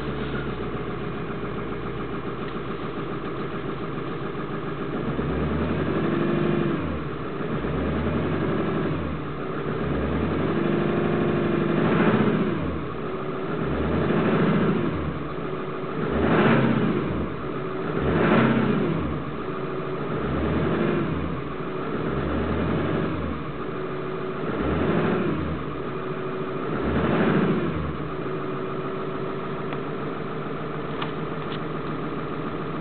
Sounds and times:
Medium engine (mid frequency): 0.0 - 32.8
Vehicle: 0.0 - 32.8
Accelerating, revving, vroom: 5.0 - 12.8, 13.5 - 15.2, 16.0 - 19.2, 20.1 - 23.4, 24.4 - 25.6, 26.6 - 28.0.

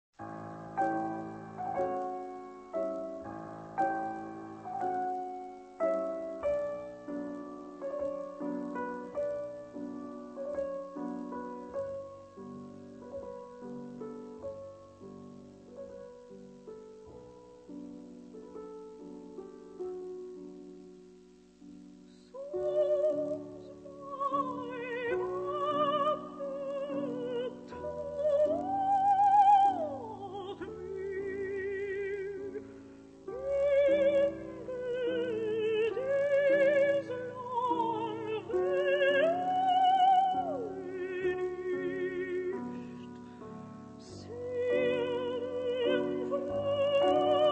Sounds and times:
Piano: 0.1 - 47.5.

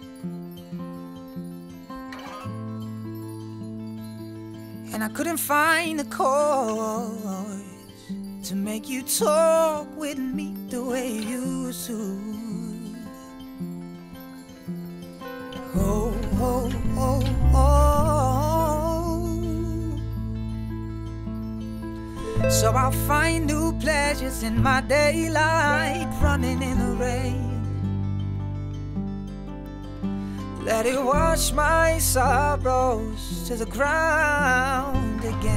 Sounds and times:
Music: 0.0 - 35.5.

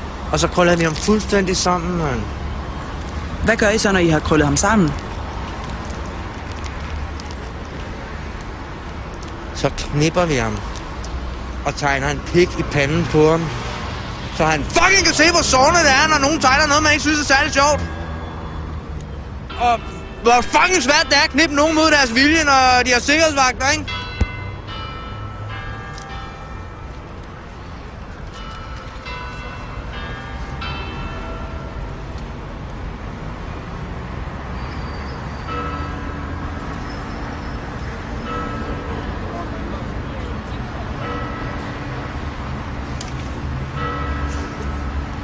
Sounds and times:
Narration, monologue: 0.2 - 25.1
Male speech, man speaking: 0.3 - 2.3, 9.6 - 10.6, 14.4 - 17.9, 19.6 - 23.9.

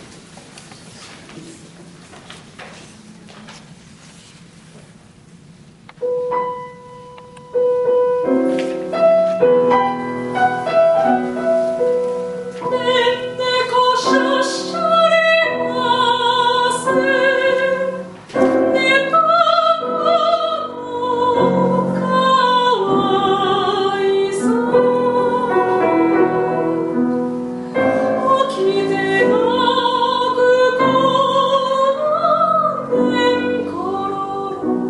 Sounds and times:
Music: 6.0 - 34.8.

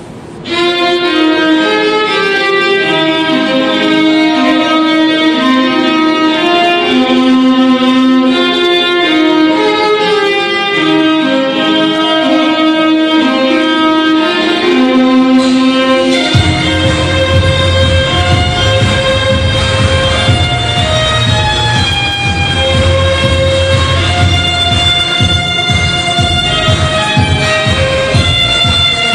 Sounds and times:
Violin, fiddle: 0.4 - 29.1.

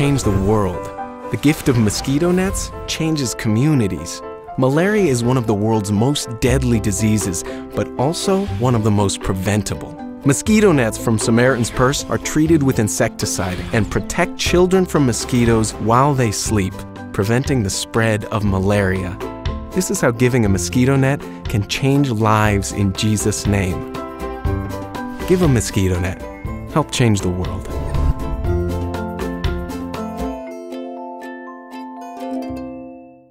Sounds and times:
Speech: 0.0 - 19.2, 19.8 - 23.9, 25.3 - 27.8
Music: 0.0 - 33.3.

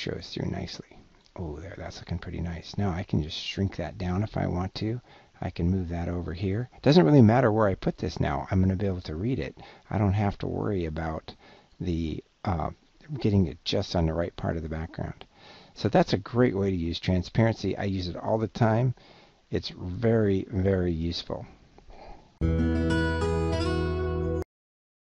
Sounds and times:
Speech: 0.0 - 21.6
Music: 22.4 - 24.5.

